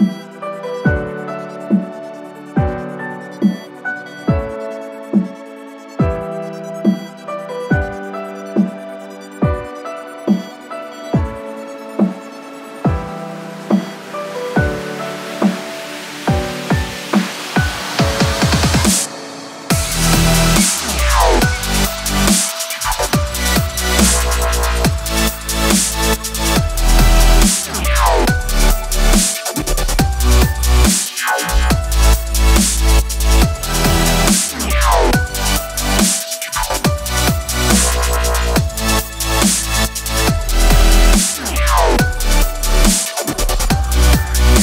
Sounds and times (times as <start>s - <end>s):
Drum and bass: 6.0s - 44.6s.